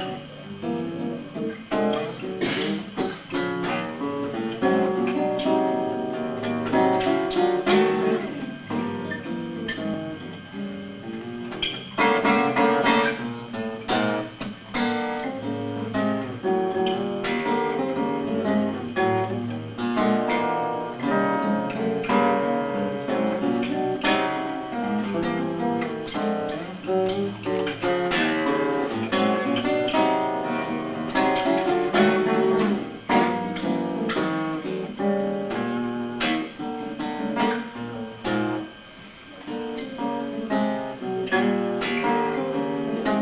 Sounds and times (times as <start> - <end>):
Guitar: 0.0 - 43.2.